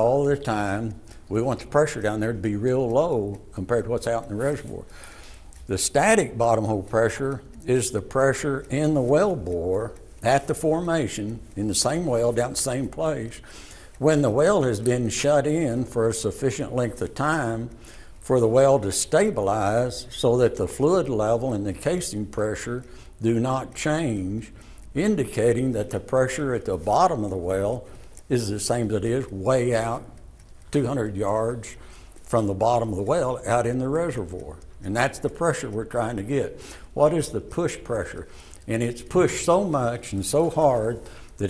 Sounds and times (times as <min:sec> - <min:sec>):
Speech: 0:00.0 - 0:04.9, 0:05.6 - 0:13.4, 0:14.0 - 0:41.5.